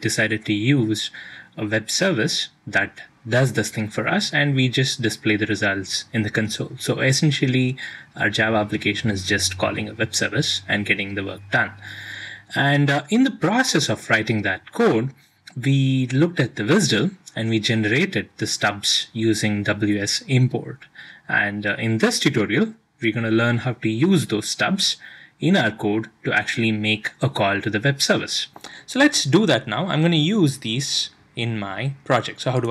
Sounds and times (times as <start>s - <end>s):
Speech: 0.0s - 32.7s.